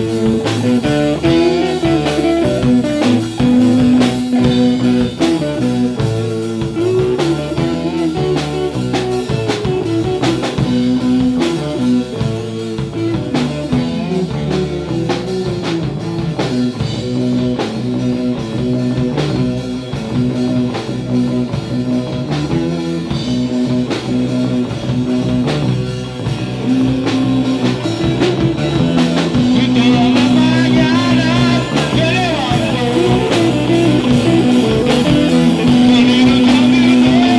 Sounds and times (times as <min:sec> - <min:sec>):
Blues: 0:00.0 - 0:37.3
Drum: 0:00.0 - 0:37.3
Drum kit: 0:00.0 - 0:37.3
Guitar: 0:00.0 - 0:37.3
Rock music: 0:00.0 - 0:37.3.